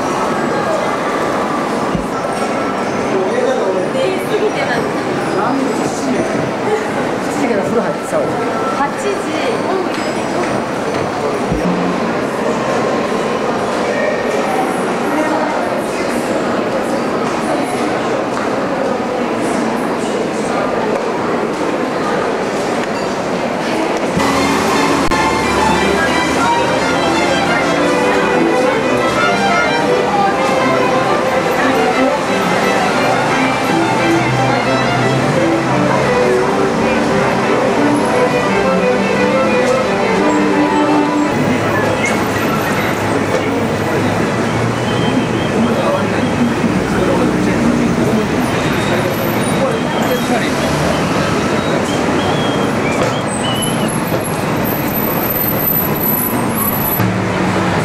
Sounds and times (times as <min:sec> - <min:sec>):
Speech: 0:00.0 - 0:24.3, 0:25.1 - 0:53.2
Outside, urban or manmade: 0:00.0 - 0:57.8.